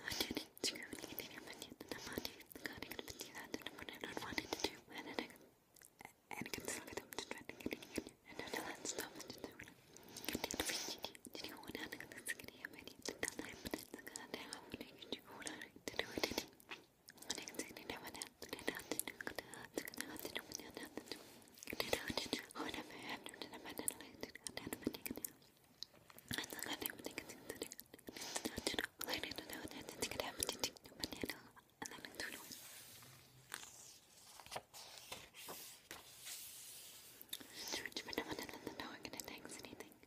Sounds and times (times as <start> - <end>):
Whispering: 0.0 - 5.4, 6.0 - 25.5, 26.3 - 33.0, 37.3 - 40.0.